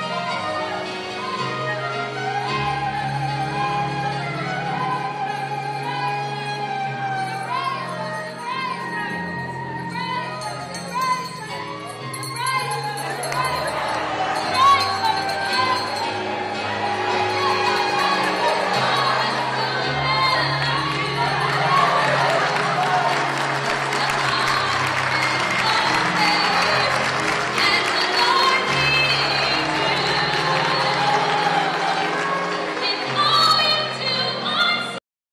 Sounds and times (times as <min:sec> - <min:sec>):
Music: 0:00.0 - 0:35.0.